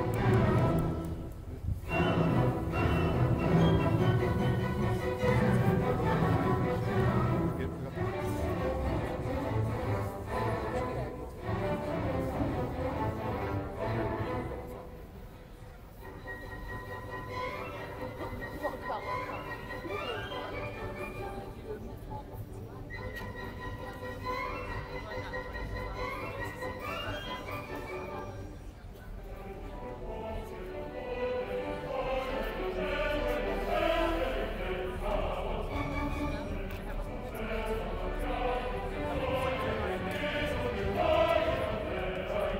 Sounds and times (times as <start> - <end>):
Music: 0.0 - 42.5
Speech: 7.0 - 9.3, 17.5 - 42.5.